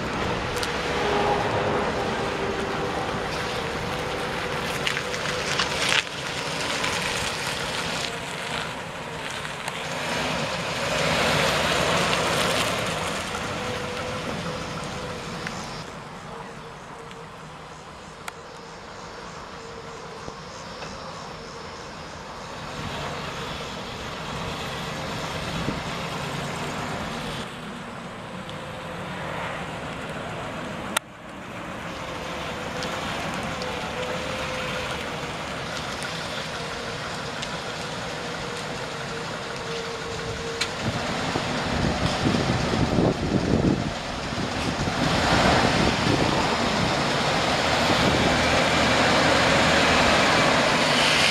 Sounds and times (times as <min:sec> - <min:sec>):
Truck: 0:00.0 - 0:51.3.